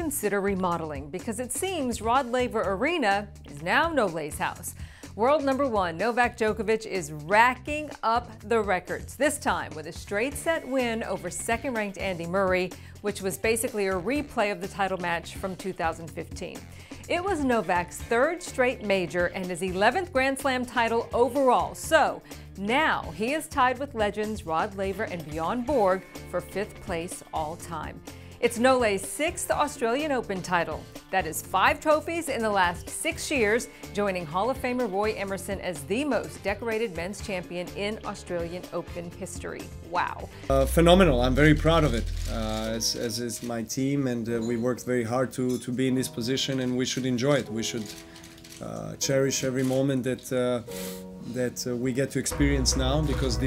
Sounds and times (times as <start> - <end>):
Music: 0.0 - 53.4.